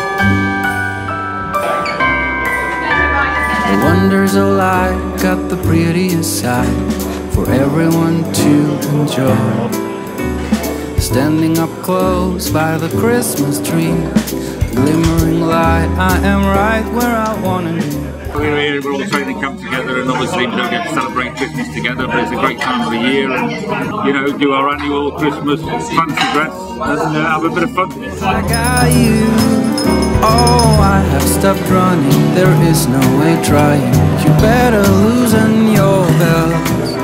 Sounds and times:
Music: 0.0 - 37.0
Speech: 16.2 - 29.3.

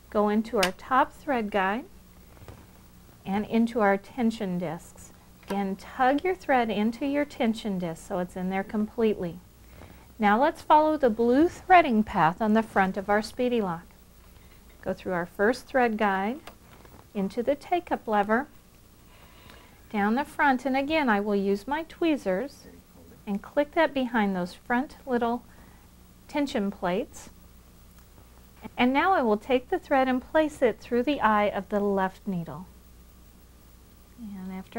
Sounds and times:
Speech: 0.1 - 1.9, 3.3 - 9.4, 14.8 - 16.4, 17.2 - 18.5, 19.9 - 25.4, 26.3 - 27.3, 28.6 - 32.7, 34.2 - 34.7.

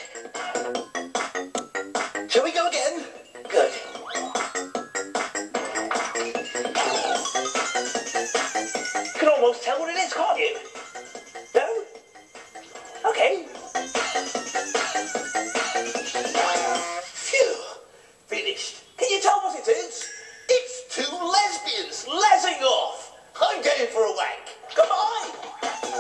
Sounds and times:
Music: 0.0 - 17.3, 24.3 - 26.0
Speech: 2.3 - 3.8, 9.2 - 10.6, 17.3 - 25.4.

